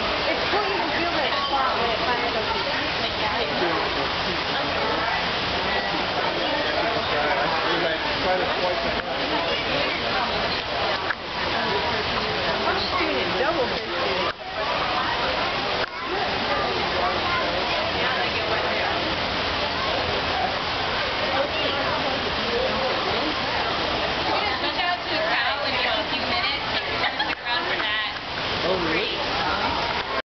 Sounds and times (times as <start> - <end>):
Speech: 0.0 - 30.2.